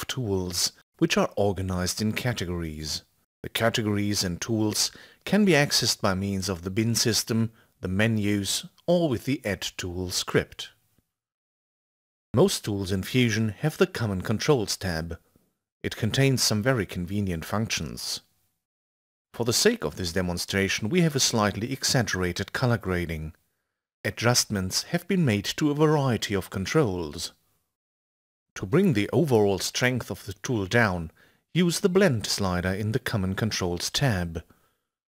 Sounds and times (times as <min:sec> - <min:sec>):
Speech: 0:00.0 - 0:10.8, 0:12.4 - 0:15.2, 0:15.8 - 0:18.3, 0:19.4 - 0:23.4, 0:24.1 - 0:27.4, 0:28.6 - 0:34.6.